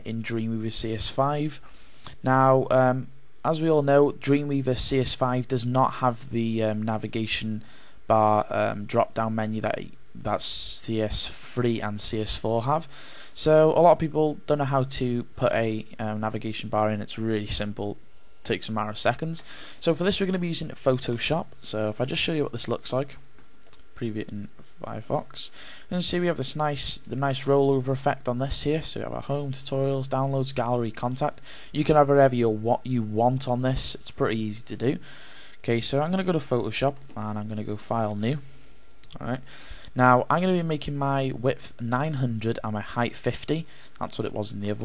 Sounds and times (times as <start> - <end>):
Speech: 0.0 - 23.2, 24.0 - 35.0, 35.6 - 38.5, 39.1 - 44.8.